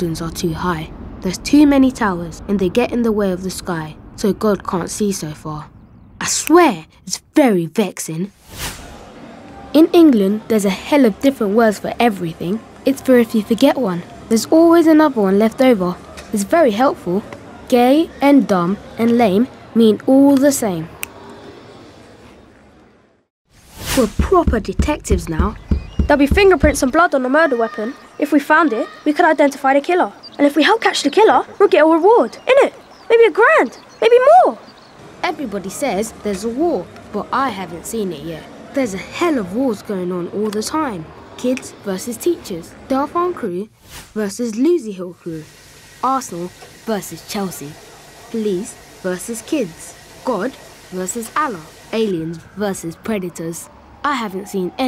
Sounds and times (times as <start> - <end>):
Speech: 0.0 - 8.3, 9.5 - 20.9, 24.0 - 34.6, 35.2 - 54.8.